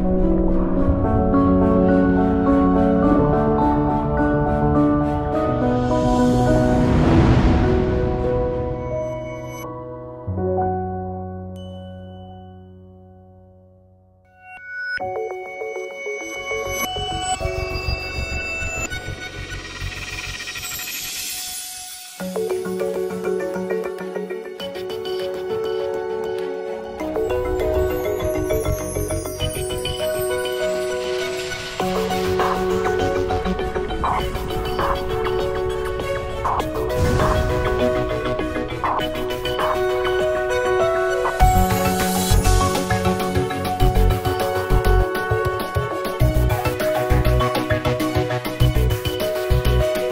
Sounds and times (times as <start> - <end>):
Music: 0.0 - 50.1.